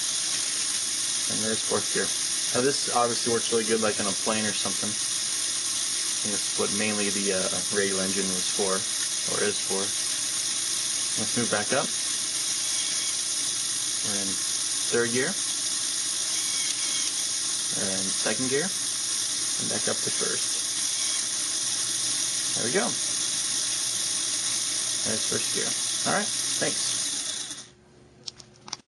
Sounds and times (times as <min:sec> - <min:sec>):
Engine: 0:00.0 - 0:27.7
Speech: 0:01.3 - 0:05.0, 0:06.2 - 0:09.9, 0:11.2 - 0:11.9, 0:14.0 - 0:15.4, 0:17.7 - 0:18.8, 0:19.6 - 0:20.6, 0:22.6 - 0:23.0, 0:25.0 - 0:26.9.